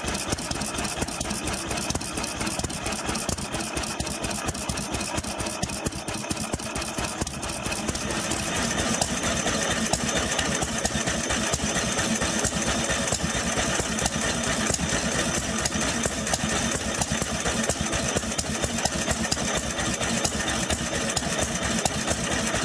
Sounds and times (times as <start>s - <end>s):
Engine: 0.0s - 22.6s.